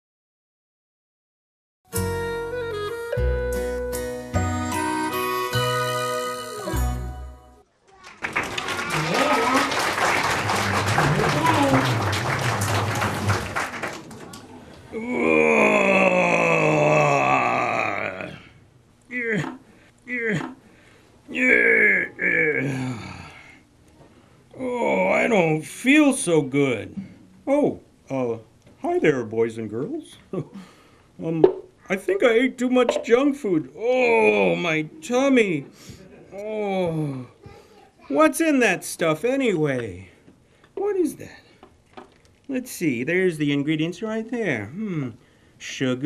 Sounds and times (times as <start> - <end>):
Music: 1.9 - 7.6.